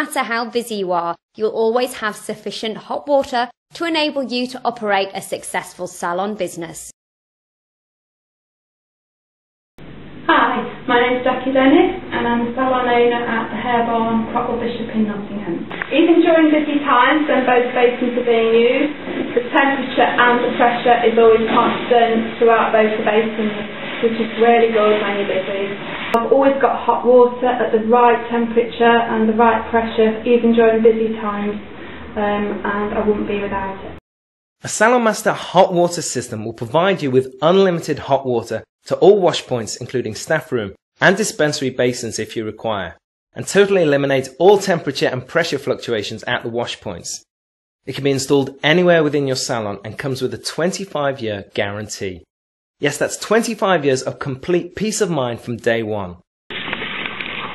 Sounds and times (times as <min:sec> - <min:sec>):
Narration, monologue: 0:00.0 - 0:07.0, 0:09.8 - 0:34.0, 0:34.6 - 0:56.9.